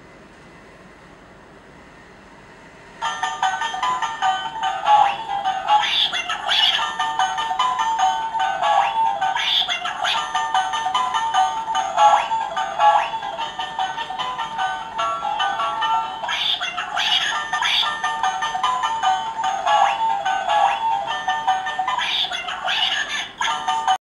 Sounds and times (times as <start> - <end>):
Music: 3.0 - 24.0.